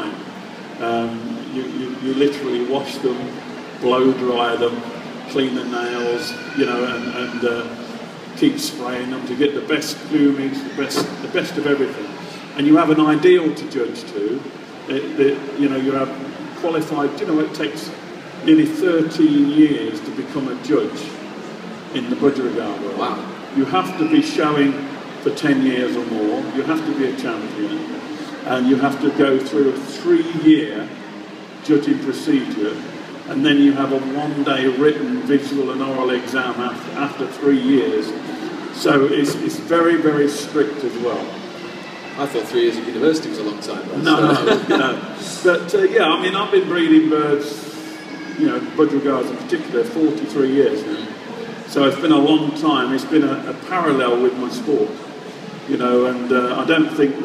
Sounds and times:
Speech: 0:00.0 - 0:21.3, 0:21.9 - 0:41.4, 0:42.2 - 0:55.0, 0:55.6 - 0:57.2
Inside, large room or hall: 0:00.0 - 0:57.2.

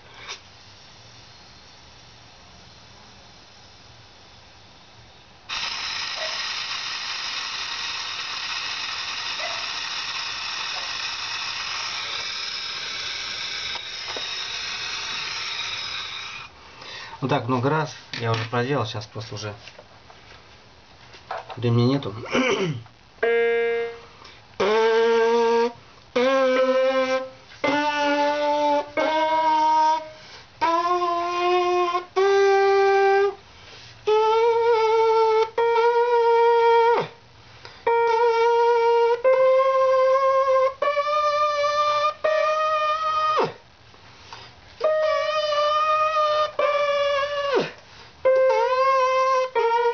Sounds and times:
Musical instrument: 0:23.2 - 0:30.8.

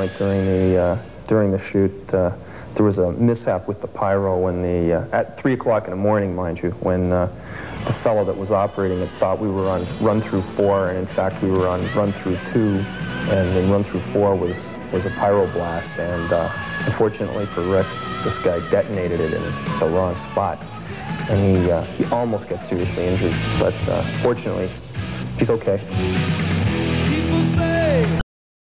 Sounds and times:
Music: 0:00.0 - 0:01.8, 0:07.1 - 0:28.2
Speech: 0:00.0 - 0:20.6, 0:21.3 - 0:24.8, 0:25.4 - 0:25.9.

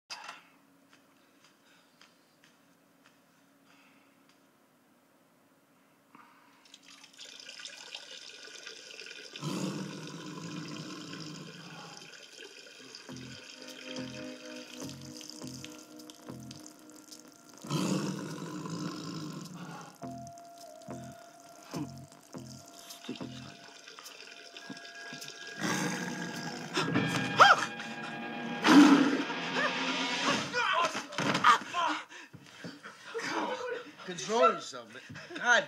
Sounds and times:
Water: 0:06.6 - 0:17.7, 0:20.0 - 0:26.7.

